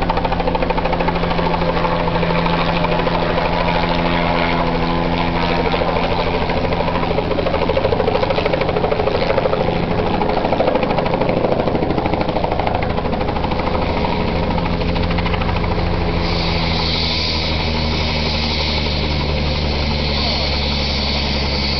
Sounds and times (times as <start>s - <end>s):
Speech: 20.1s - 20.6s.